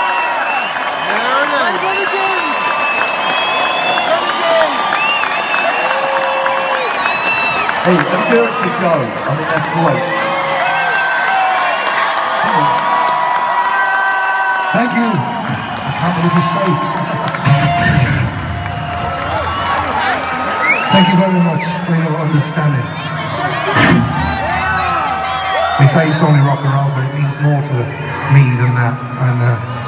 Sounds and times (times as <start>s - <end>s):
Cheering: 0.0s - 29.8s
Speech: 7.8s - 10.0s, 14.8s - 17.0s, 20.9s - 22.8s, 25.8s - 29.7s
Music: 17.4s - 19.2s.